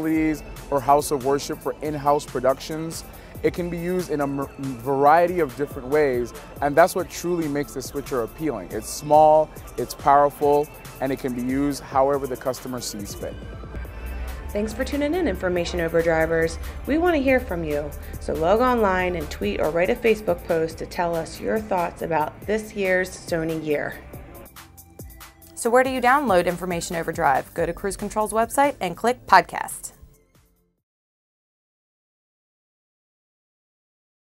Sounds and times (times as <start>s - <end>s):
Music: 0.0s - 30.9s
Speech: 14.6s - 24.0s, 25.6s - 29.9s.